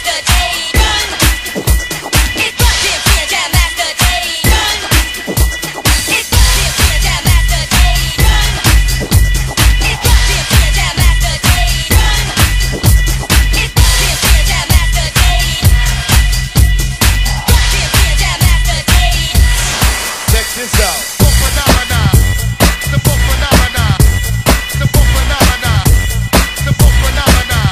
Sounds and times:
Music: 0.0s - 27.7s.

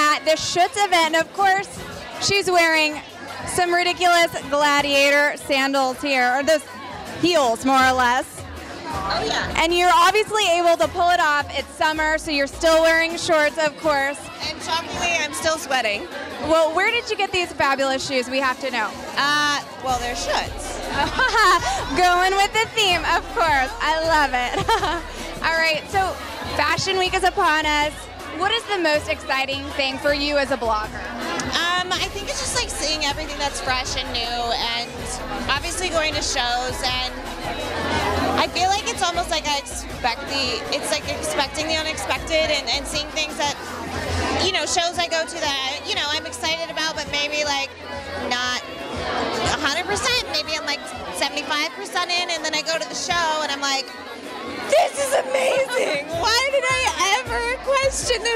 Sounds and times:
Music: 0.0s - 58.3s.

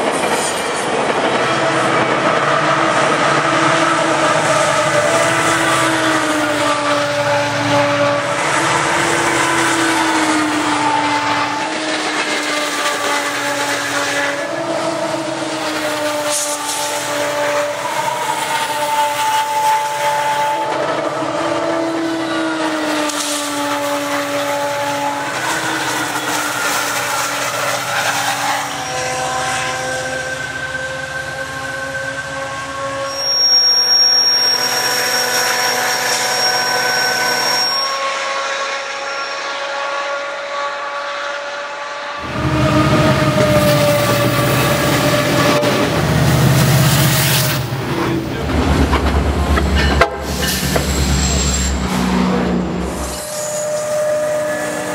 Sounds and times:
Train: 0.0s - 54.9s.

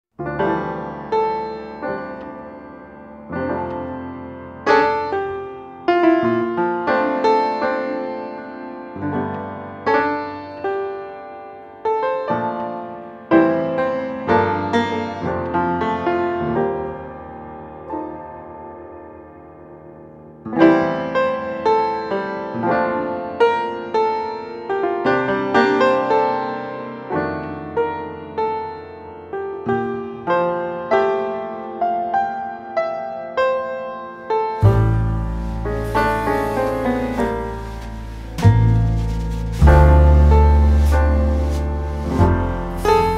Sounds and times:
Electric piano: 0.2s - 43.1s.

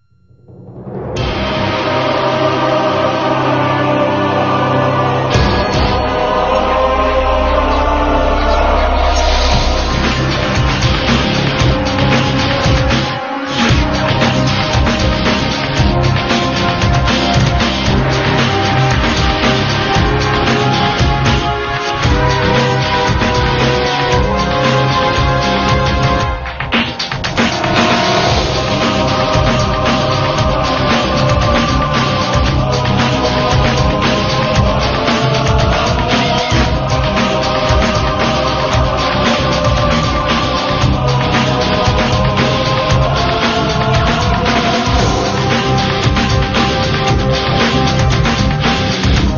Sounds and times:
Music: 0.0s - 49.3s.

